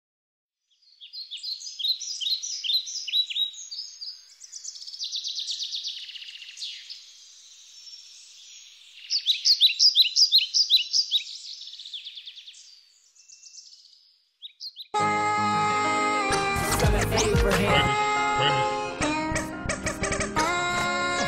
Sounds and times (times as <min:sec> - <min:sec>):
Chirp, tweet: 0:00.6 - 0:15.0.